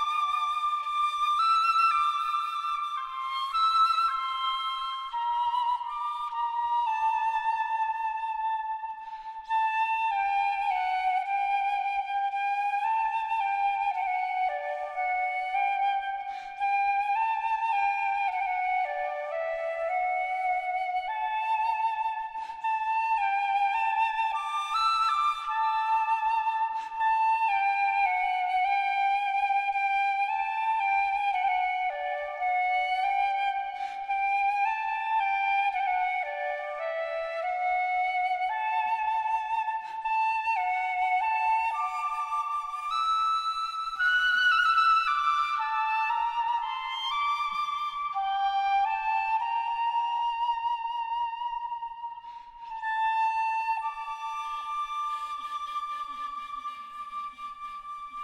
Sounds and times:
Music: 0.0s - 58.2s.

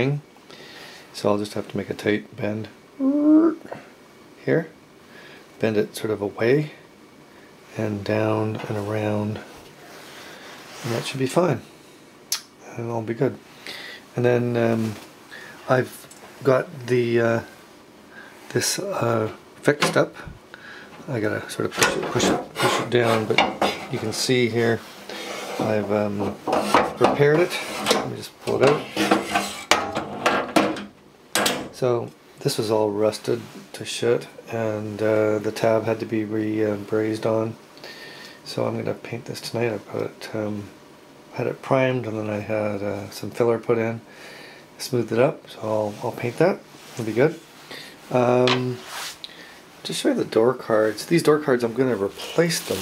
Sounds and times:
Speech: 0.0s - 0.3s, 1.2s - 3.8s, 4.4s - 4.8s, 5.6s - 6.8s, 7.7s - 9.6s, 10.8s - 11.7s, 12.6s - 13.4s, 14.1s - 17.6s, 18.5s - 20.4s, 21.0s - 24.9s, 25.6s - 26.4s, 27.0s - 29.1s, 31.8s - 37.6s, 38.5s - 44.1s, 44.8s - 47.4s, 48.1s - 48.9s, 49.8s - 52.8s.

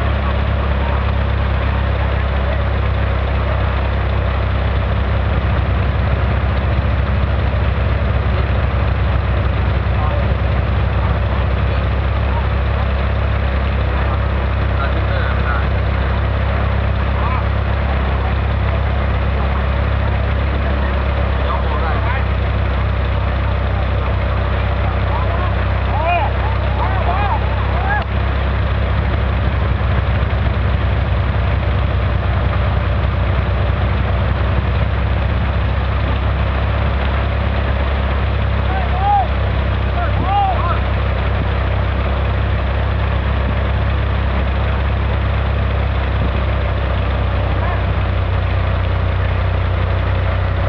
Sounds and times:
Vehicle: 0.0s - 50.6s
Water: 0.0s - 50.6s
Speech: 2.2s - 3.9s, 9.8s - 22.5s, 23.6s - 28.2s, 38.6s - 40.9s, 47.6s - 48.0s.

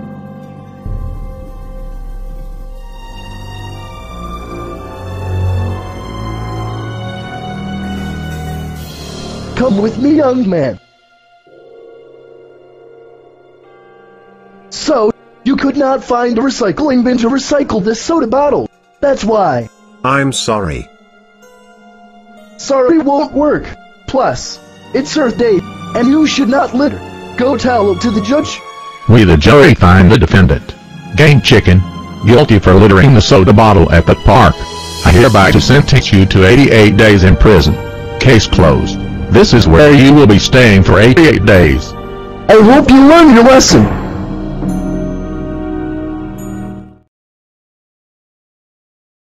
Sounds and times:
Music: 0.0s - 47.1s
Speech: 9.6s - 10.8s, 14.7s - 20.9s, 22.6s - 41.9s, 42.5s - 43.9s.

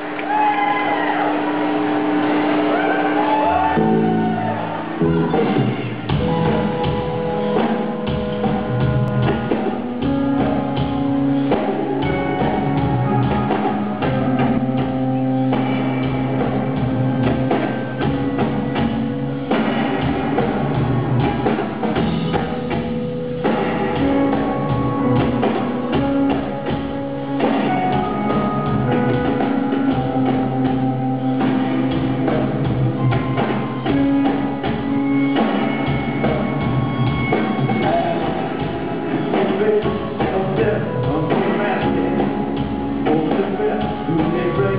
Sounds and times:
Music: 0.0s - 44.7s.

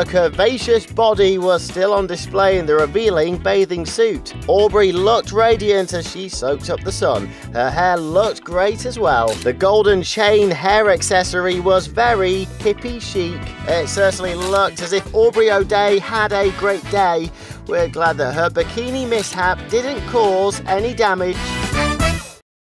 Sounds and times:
Speech: 0.0s - 21.4s
Music: 0.0s - 22.4s.

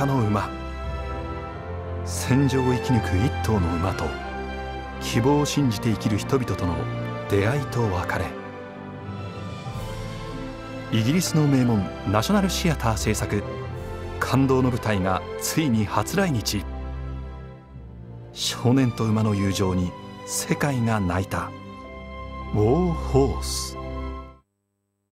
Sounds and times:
Speech: 0.0s - 0.5s, 2.1s - 4.2s, 5.0s - 8.4s, 10.9s - 13.5s, 14.2s - 16.7s, 18.4s - 21.6s, 22.5s - 23.8s
Music: 0.0s - 24.4s.

